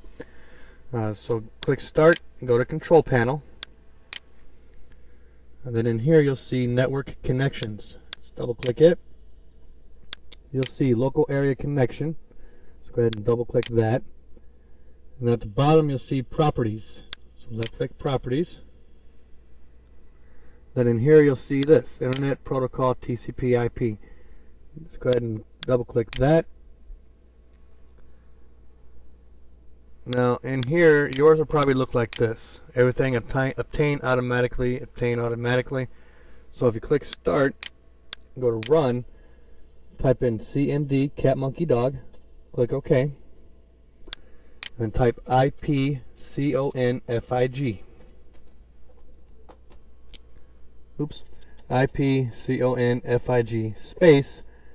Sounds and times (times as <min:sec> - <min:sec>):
Speech: 0:00.9 - 0:03.5, 0:05.6 - 0:09.0, 0:10.5 - 0:12.2, 0:12.8 - 0:14.1, 0:15.2 - 0:18.7, 0:20.8 - 0:24.0, 0:24.8 - 0:26.5, 0:30.1 - 0:35.9, 0:36.5 - 0:37.6, 0:38.4 - 0:39.1, 0:40.0 - 0:43.2, 0:44.8 - 0:47.9, 0:51.0 - 0:54.5.